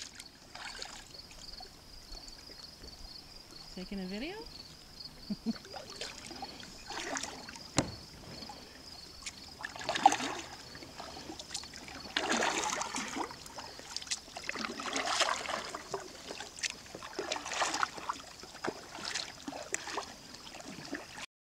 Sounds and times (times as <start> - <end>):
Rowboat, canoe, kayak: 0.0 - 21.3.